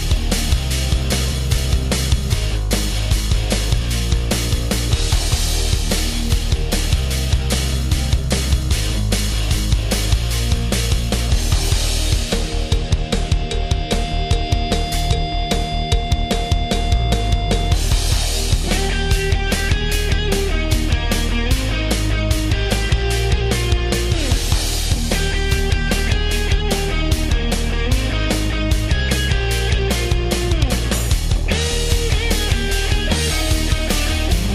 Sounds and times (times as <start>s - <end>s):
Music: 0.0s - 34.5s.